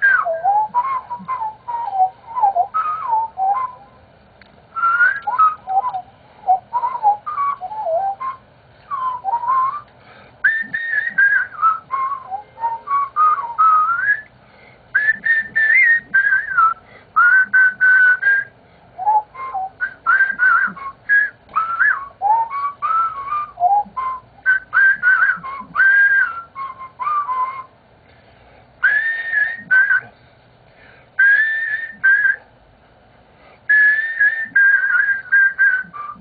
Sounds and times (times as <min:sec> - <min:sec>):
Whistling: 0:00.0 - 0:04.0, 0:04.7 - 0:14.4, 0:15.0 - 0:27.8, 0:28.8 - 0:30.2, 0:31.2 - 0:32.5, 0:33.7 - 0:36.2.